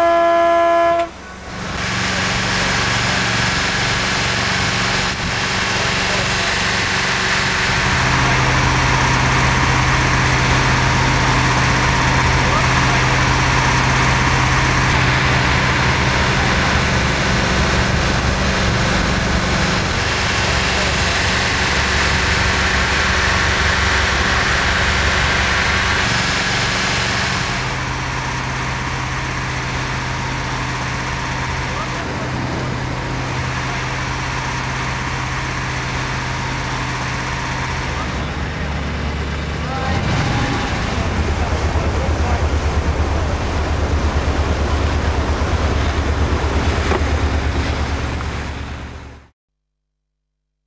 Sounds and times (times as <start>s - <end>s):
Sailboat, sailing ship: 0.0s - 49.3s
Motorboat, speedboat: 0.0s - 49.4s
Waves, surf: 39.7s - 49.2s.